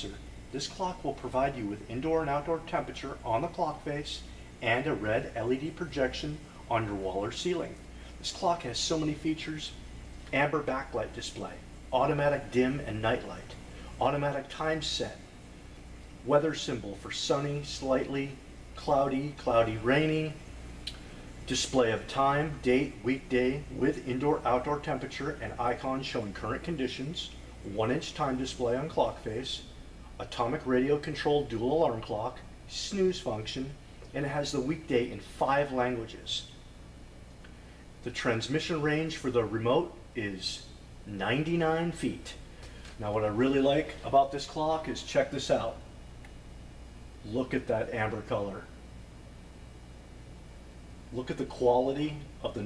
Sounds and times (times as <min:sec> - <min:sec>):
Speech: 0:00.0 - 0:15.3, 0:16.2 - 0:20.4, 0:21.4 - 0:36.6, 0:38.0 - 0:45.9, 0:47.2 - 0:48.8, 0:51.1 - 0:52.6.